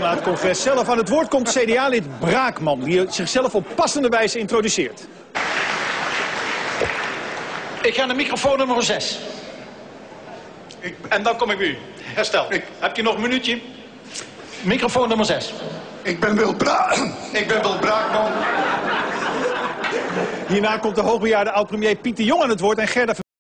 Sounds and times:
Speech: 0:00.0 - 0:05.1, 0:07.8 - 0:09.4, 0:10.8 - 0:13.7, 0:14.6 - 0:18.5, 0:20.5 - 0:23.3.

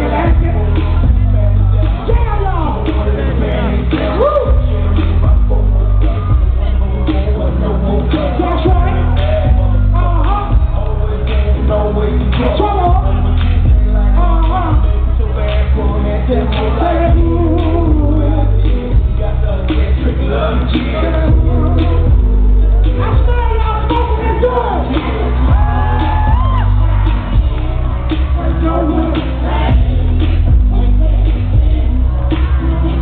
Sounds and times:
Music: 0:00.0 - 0:33.0.

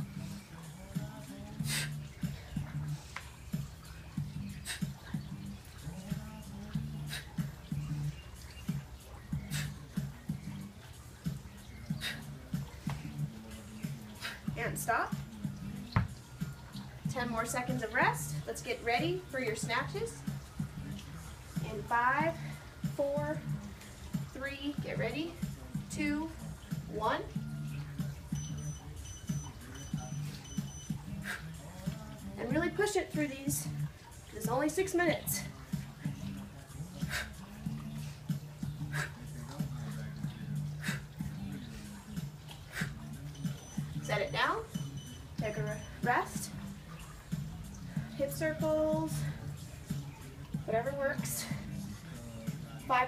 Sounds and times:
Music: 0:00.0 - 0:53.0.

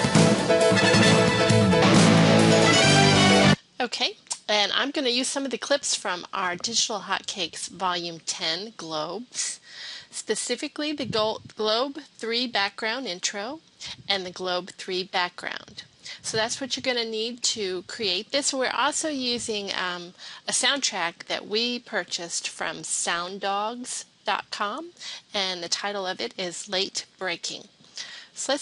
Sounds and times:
Speech: 0:03.8 - 0:27.7, 0:28.4 - 0:28.6.

